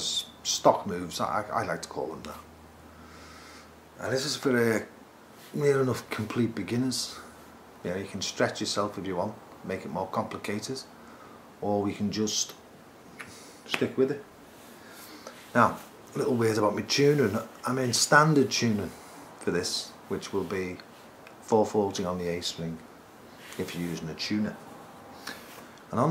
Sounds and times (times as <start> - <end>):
Speech: 0.0 - 2.5, 4.0 - 10.9, 11.6 - 12.6, 13.7 - 14.3, 15.5 - 22.9, 23.6 - 24.6, 25.9 - 26.1.